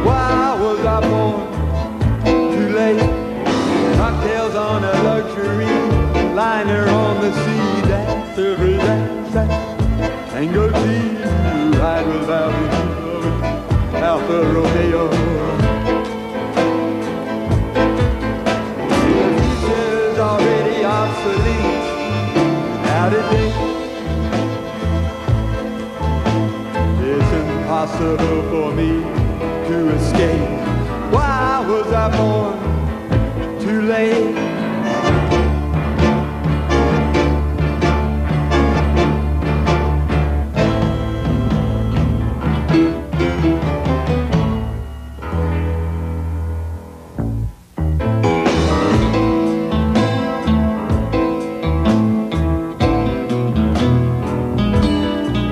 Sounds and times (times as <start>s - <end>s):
Steel guitar, slide guitar: 0.0s - 46.4s, 47.9s - 55.5s
Blues: 0.0s - 55.5s.